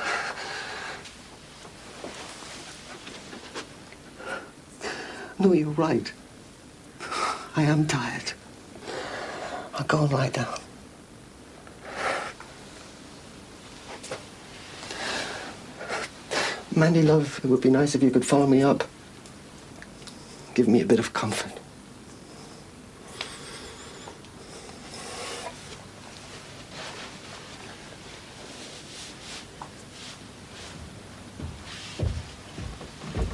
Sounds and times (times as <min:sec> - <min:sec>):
Inside, small room: 0:00.0 - 0:33.3
Speech: 0:16.7 - 0:18.9, 0:20.6 - 0:21.7.